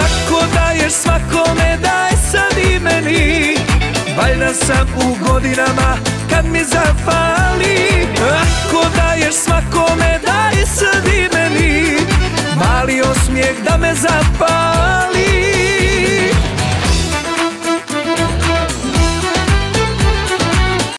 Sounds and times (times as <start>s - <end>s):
Pop music: 0.0s - 20.9s.